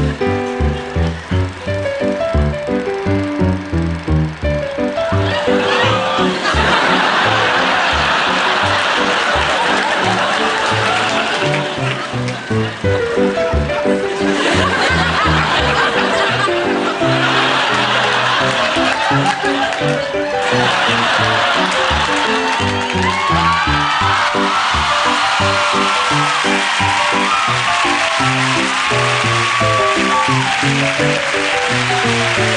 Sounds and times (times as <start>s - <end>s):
Laughter: 5.3s - 12.8s, 14.2s - 22.6s.